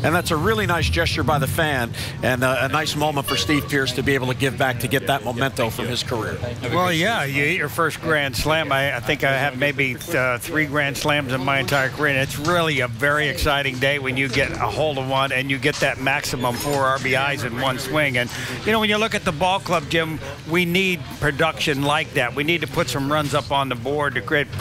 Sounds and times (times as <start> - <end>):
Speech: 0.0 - 24.6.